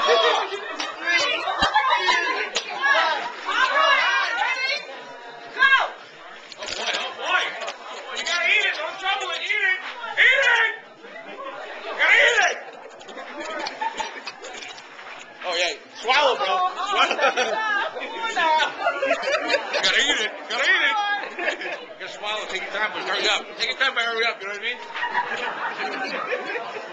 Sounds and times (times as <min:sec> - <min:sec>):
Inside, large room or hall: 0:00.0 - 0:26.9.